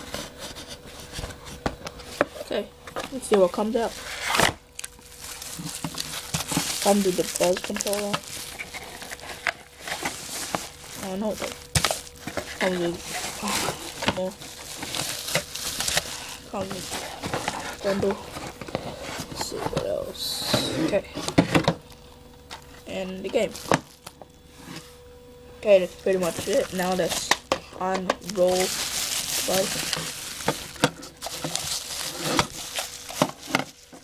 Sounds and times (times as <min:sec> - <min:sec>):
Speech: 0:02.5 - 0:04.0, 0:06.8 - 0:08.2, 0:11.0 - 0:11.6, 0:16.5 - 0:17.0, 0:17.8 - 0:18.2, 0:19.4 - 0:21.1, 0:22.9 - 0:23.6, 0:25.6 - 0:28.8, 0:29.4 - 0:29.8.